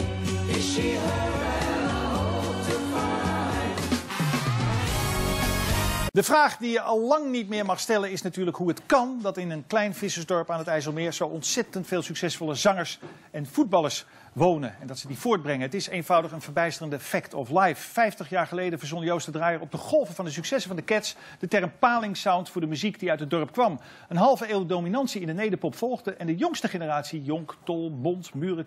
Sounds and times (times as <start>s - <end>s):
Speech: 6.2s - 28.6s.